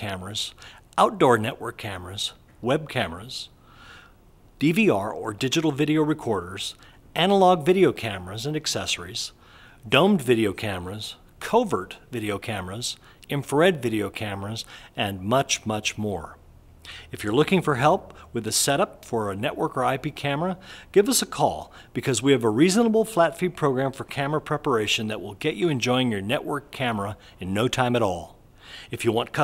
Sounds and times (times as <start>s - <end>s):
Speech: 0.0s - 3.6s, 4.6s - 16.4s, 17.1s - 29.4s.